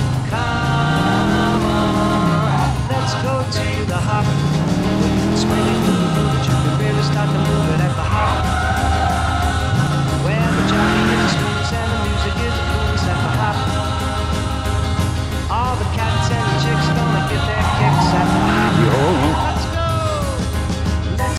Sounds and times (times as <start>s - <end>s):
Skidding: 0.0s - 20.7s
Music: 0.0s - 21.3s.